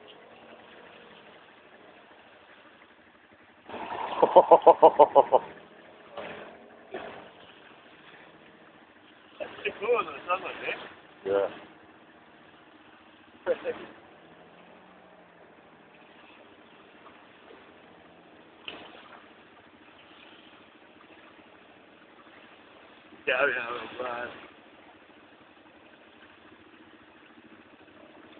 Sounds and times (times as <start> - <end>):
Speech: 9.4 - 11.6, 13.4 - 13.9, 23.2 - 24.4.